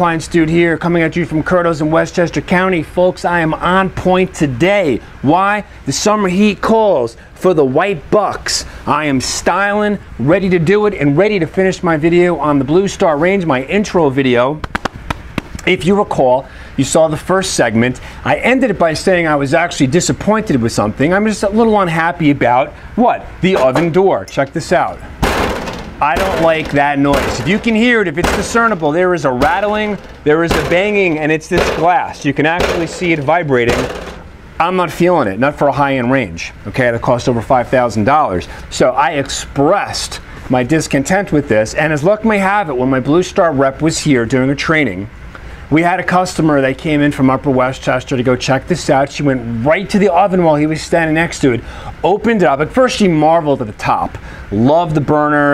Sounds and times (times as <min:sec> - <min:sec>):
Speech: 0:00.0 - 0:14.6, 0:15.6 - 0:25.0, 0:26.0 - 0:34.0, 0:34.6 - 0:45.1, 0:45.7 - 0:55.5.